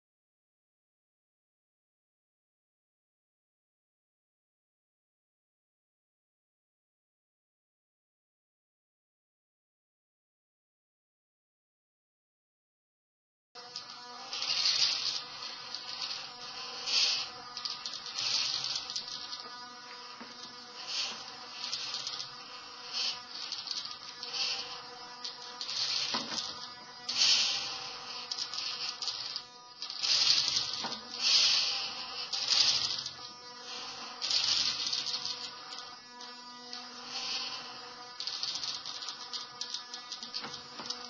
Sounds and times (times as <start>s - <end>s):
Mains hum: 13.6s - 41.1s.